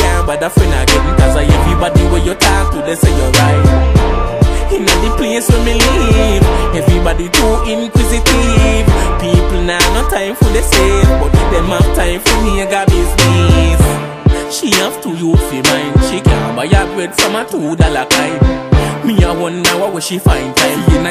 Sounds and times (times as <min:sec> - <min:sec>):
Pop music: 0:00.0 - 0:21.1.